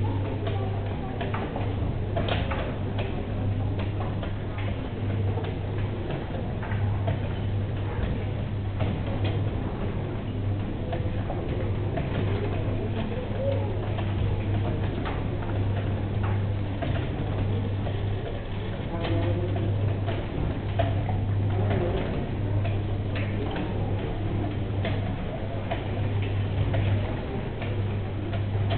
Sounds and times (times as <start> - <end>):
Speech: 0.0 - 28.7.